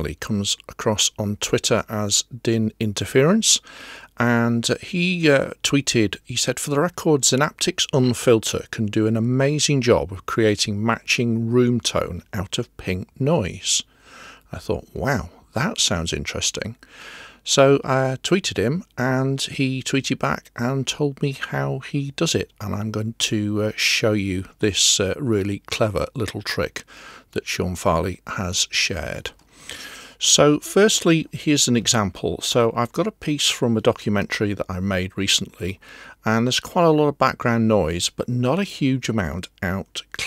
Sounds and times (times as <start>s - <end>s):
Speech: 0.0s - 13.9s, 14.5s - 16.8s, 17.4s - 29.4s, 30.2s - 40.2s.